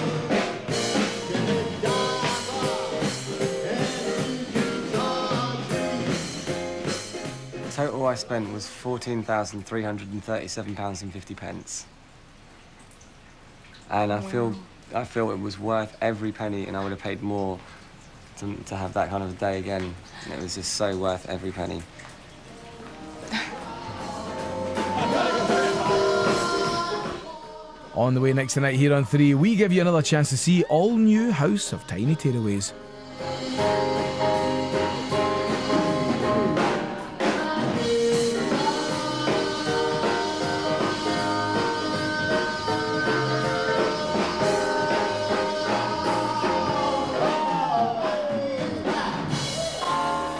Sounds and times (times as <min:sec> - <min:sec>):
Swing music: 0:00.0 - 0:08.6, 0:22.7 - 0:50.4
Speech: 0:13.9 - 0:17.6, 0:28.0 - 0:32.8.